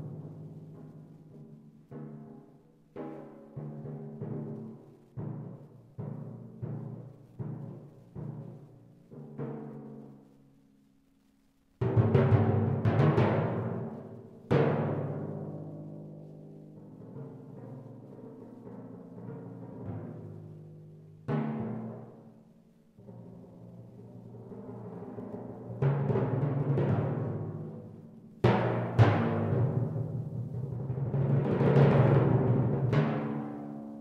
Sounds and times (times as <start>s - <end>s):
Drum: 11.8s - 15.6s, 23.0s - 34.0s.